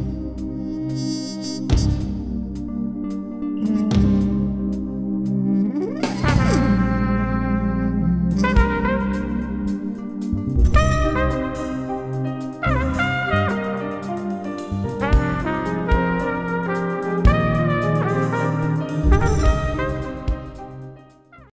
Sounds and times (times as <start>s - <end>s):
Brass instrument: 0.0s - 5.3s, 6.0s - 21.5s.